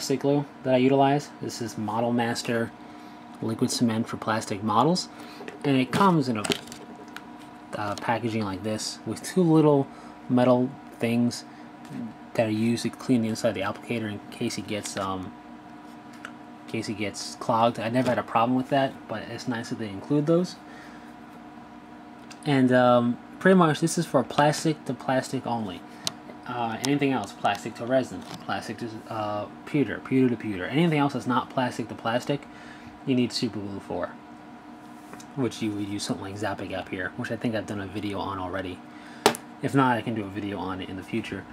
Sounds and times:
Speech: 0.0s - 2.8s, 3.4s - 6.6s, 7.7s - 15.4s, 16.7s - 20.6s, 22.4s - 25.8s, 26.4s - 34.2s, 35.2s - 38.8s, 39.6s - 41.5s.

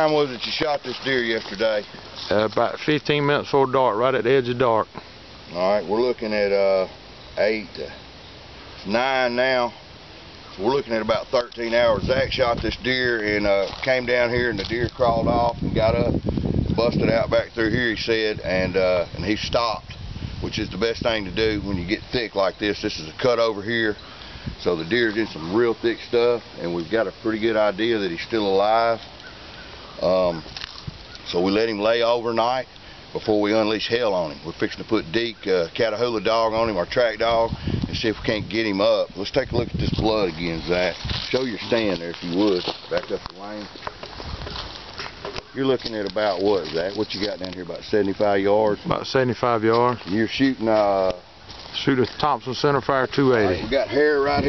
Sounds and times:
Speech: 0.0s - 8.0s, 8.8s - 9.8s, 10.6s - 16.2s, 16.8s - 24.0s, 24.6s - 29.0s, 30.0s - 30.5s, 31.3s - 43.7s, 45.6s - 51.2s, 51.8s - 54.4s.

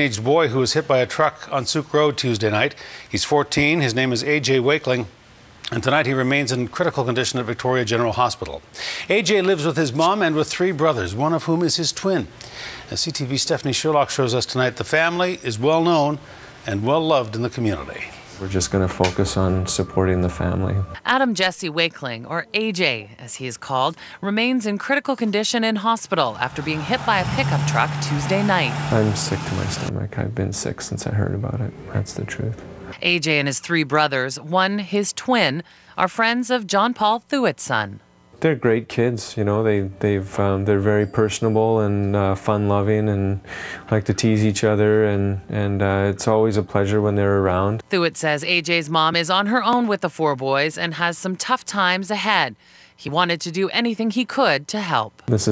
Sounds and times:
Speech: 12.9s - 35.4s, 36.0s - 52.4s, 53.1s - 55.5s
Vehicle: 26.4s - 30.0s.

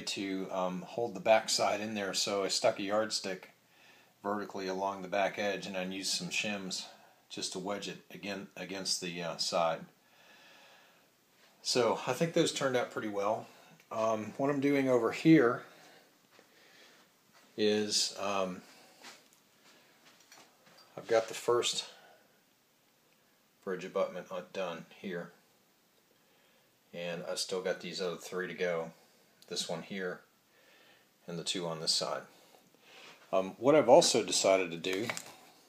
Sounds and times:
Speech: 0.0s - 3.6s, 4.2s - 9.9s, 11.6s - 15.8s, 17.6s - 18.7s, 21.0s - 22.1s, 23.6s - 25.4s, 26.9s - 30.3s, 31.2s - 32.4s, 33.3s - 35.4s
Inside, small room: 0.0s - 35.6s.

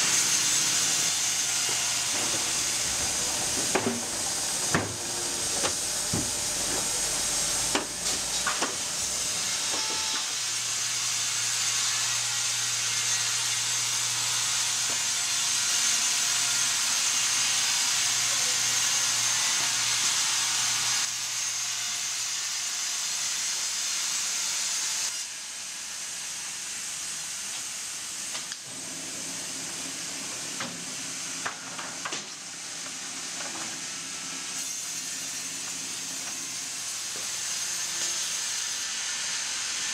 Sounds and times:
Wood: 0.0s - 7.0s, 7.7s - 8.8s
Sawing: 0.0s - 39.9s.

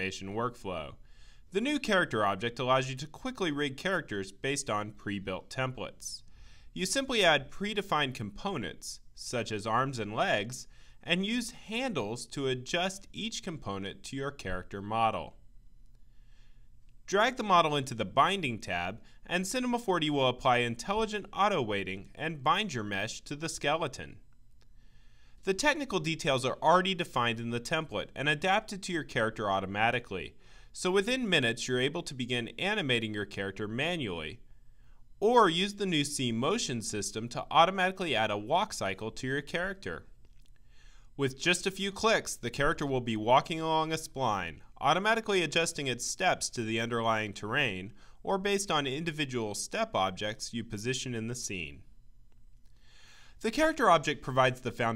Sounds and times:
Speech: 0.0s - 15.4s, 17.1s - 24.2s, 25.4s - 34.4s, 35.2s - 40.1s, 41.2s - 51.9s, 53.4s - 54.9s.

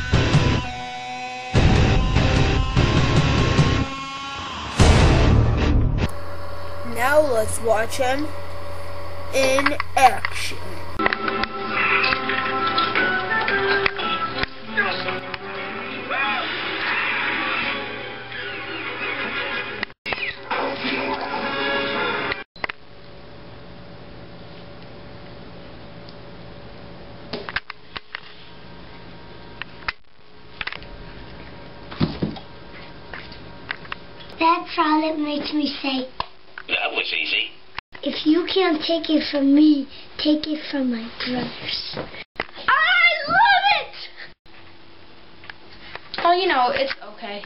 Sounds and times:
Child speech, kid speaking: 6.8s - 8.3s, 9.3s - 10.8s, 34.4s - 36.2s, 38.0s - 42.0s, 42.6s - 44.2s, 46.2s - 47.4s.

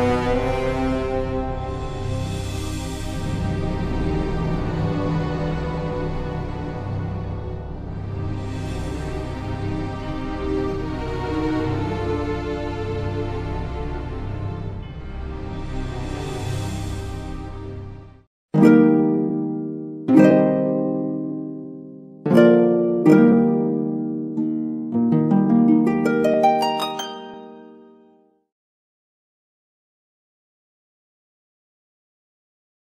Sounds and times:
Music: 0.0s - 28.6s.

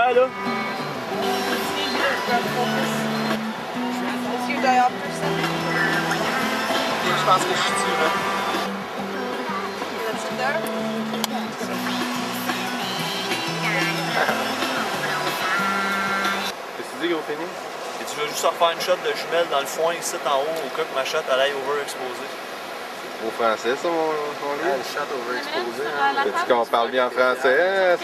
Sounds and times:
Music: 0.0s - 16.5s.

